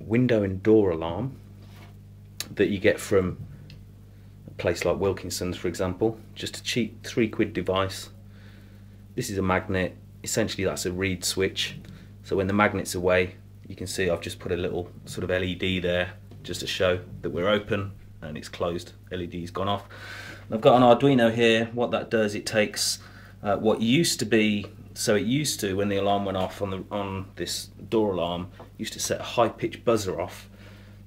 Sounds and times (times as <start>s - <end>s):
Speech: 0.0s - 1.4s, 2.4s - 3.4s, 4.6s - 8.2s, 9.2s - 19.9s, 20.5s - 30.5s.